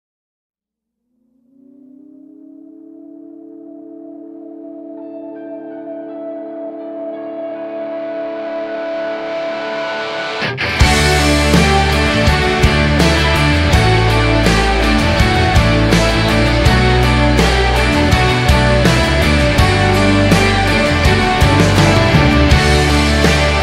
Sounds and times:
Music: 0:03.7 - 0:23.6.

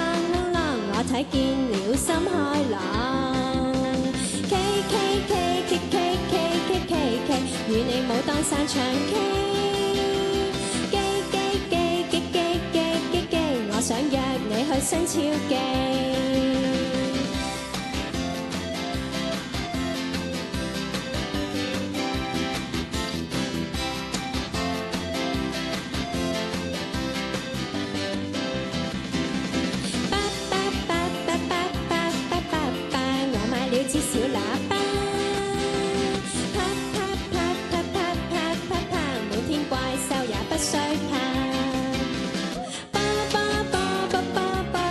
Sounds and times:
Music: 0:00.0 - 0:44.9.

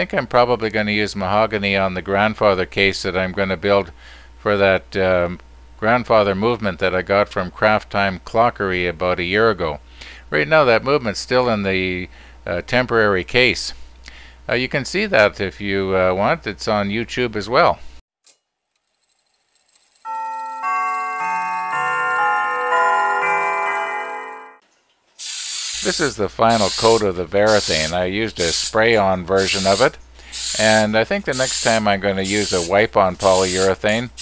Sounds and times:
Speech: 0:00.0 - 0:13.8, 0:14.5 - 0:17.8, 0:25.8 - 0:30.0, 0:30.6 - 0:34.2
Music: 0:20.1 - 0:24.6.

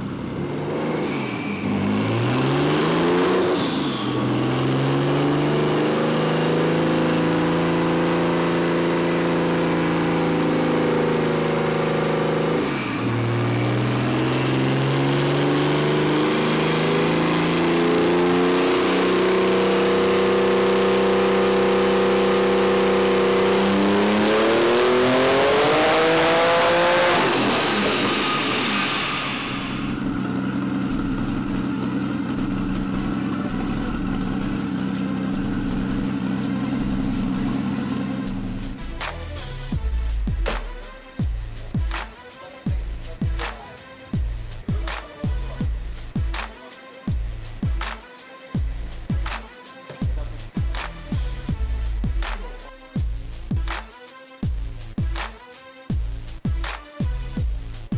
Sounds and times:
Car: 0:00.0 - 0:42.0
Music: 0:12.5 - 0:57.9.

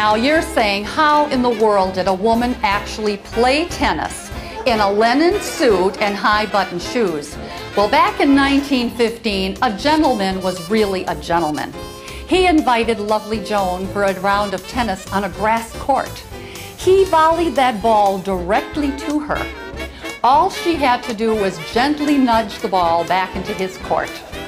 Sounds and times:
Female speech, woman speaking: 0:00.0 - 0:11.7, 0:12.3 - 0:16.2, 0:16.8 - 0:19.5, 0:20.2 - 0:24.2.

